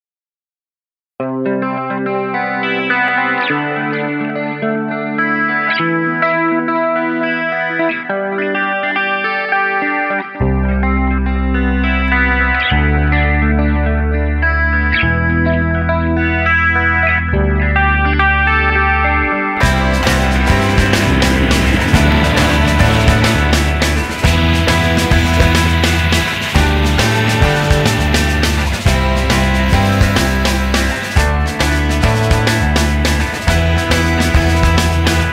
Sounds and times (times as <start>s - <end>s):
Distortion: 1.4s - 35.3s.